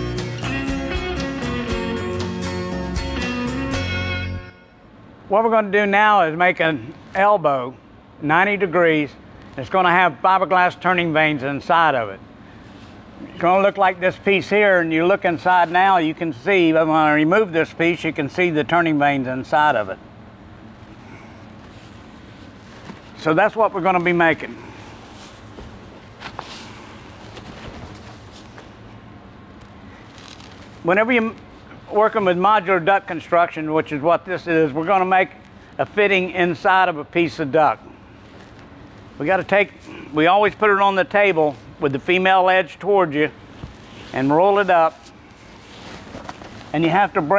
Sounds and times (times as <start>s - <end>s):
Speech: 5.3s - 12.2s, 13.3s - 20.0s, 23.2s - 24.6s, 30.8s - 37.8s, 39.2s - 43.4s, 44.1s - 45.1s, 46.7s - 47.3s.